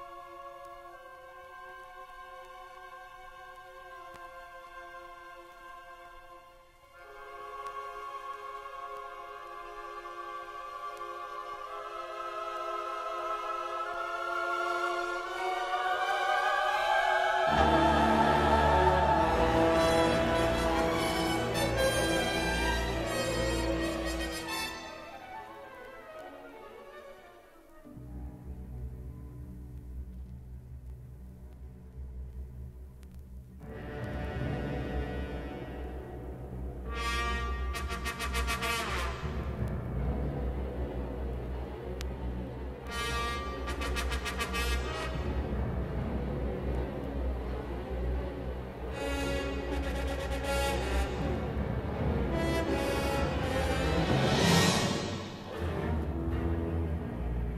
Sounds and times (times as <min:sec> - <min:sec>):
Music: 0:00.0 - 0:57.5.